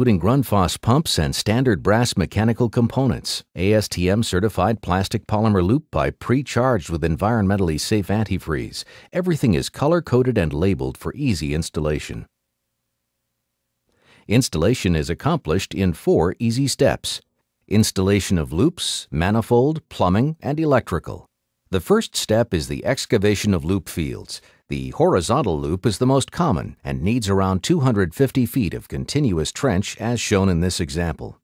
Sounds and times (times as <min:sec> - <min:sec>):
Speech: 0:00.0 - 0:12.3, 0:14.3 - 0:31.4.